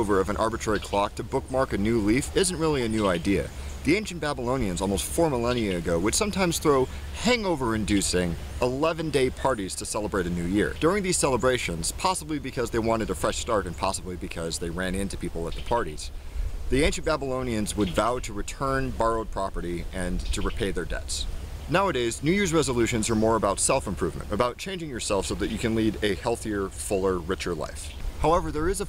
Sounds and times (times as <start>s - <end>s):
Speech: 0.0s - 16.1s, 16.7s - 28.8s.